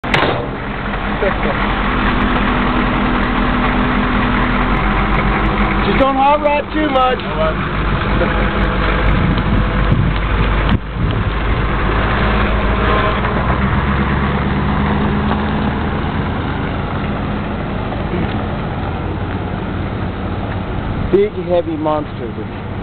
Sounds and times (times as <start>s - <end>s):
Idling: 0.0s - 22.8s
Outside, rural or natural: 0.0s - 22.8s
Truck: 0.0s - 22.8s
Speech: 5.8s - 7.6s, 21.1s - 22.6s.